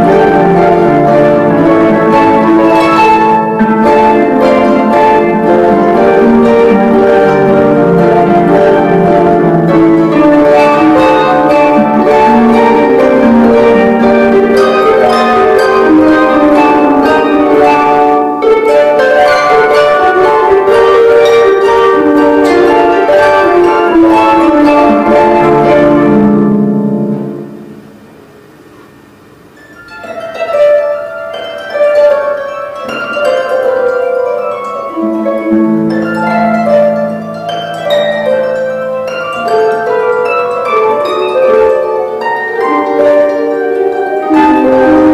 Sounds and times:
Harp: 0.0 - 45.1
Pizzicato: 0.0 - 45.1.

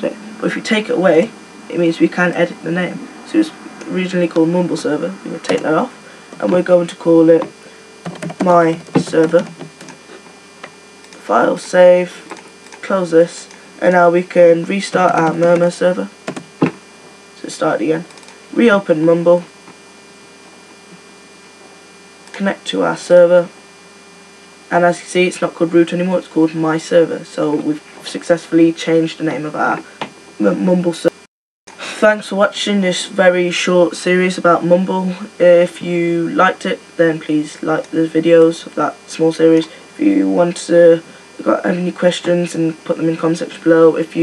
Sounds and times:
Speech: 0.0 - 7.6, 8.4 - 9.6, 11.2 - 16.2, 17.4 - 19.5, 22.3 - 23.6, 24.7 - 44.2.

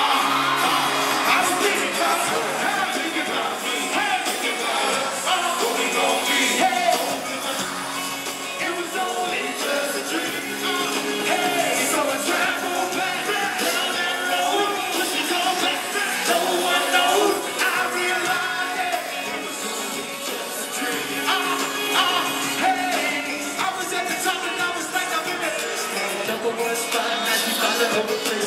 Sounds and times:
Male singing: 0.0 - 28.4
Music: 0.0 - 28.4.

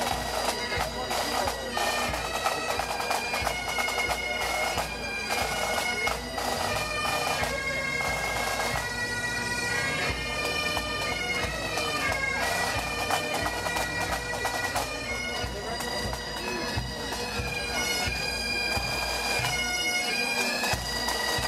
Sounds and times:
Speech: 0.0 - 8.8, 9.8 - 21.4
Music: 0.0 - 21.4.

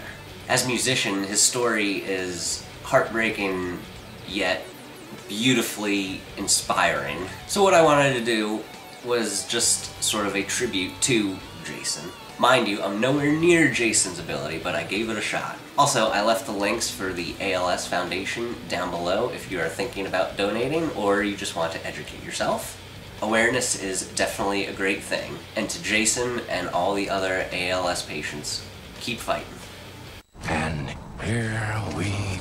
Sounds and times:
Speech: 0.0 - 29.6, 30.4 - 32.4
Music: 0.0 - 32.4.

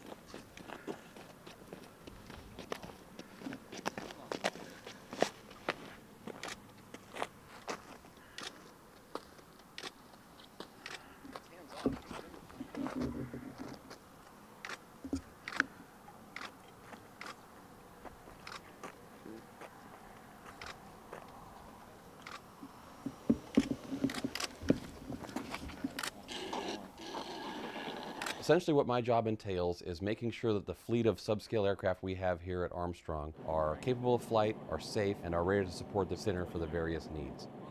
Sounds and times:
Outside, rural or natural: 0.0 - 37.7.

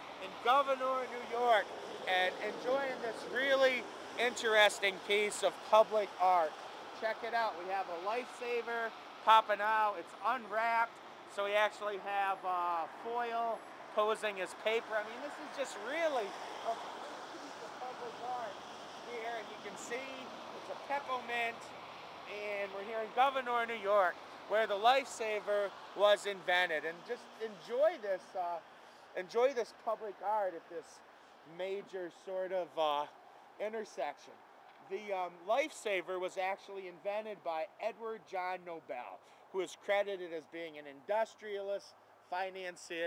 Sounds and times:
Speech: 0.2 - 21.7, 22.3 - 43.0.

